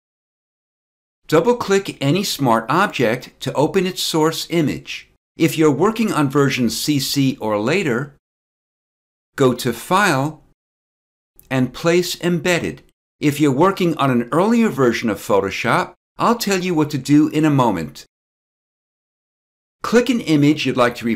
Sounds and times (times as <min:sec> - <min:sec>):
Speech: 0:01.3 - 0:08.2, 0:09.4 - 0:10.5, 0:11.4 - 0:18.1, 0:19.8 - 0:21.1.